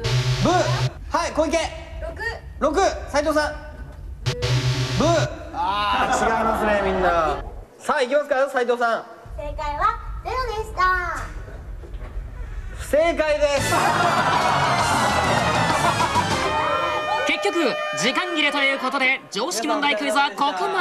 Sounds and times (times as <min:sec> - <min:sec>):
Music: 0:13.6 - 0:17.2.